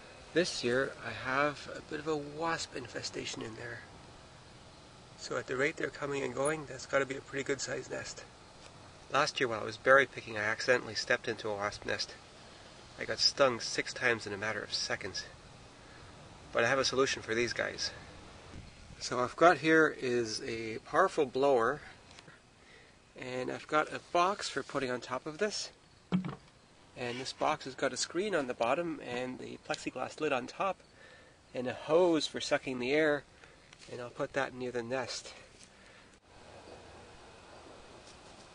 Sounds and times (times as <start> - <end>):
Speech: 0.4 - 3.9, 5.2 - 8.3, 9.1 - 12.2, 13.0 - 15.4, 16.5 - 18.1, 19.0 - 22.0, 23.2 - 25.8, 27.0 - 30.8, 31.5 - 33.3, 33.9 - 35.5.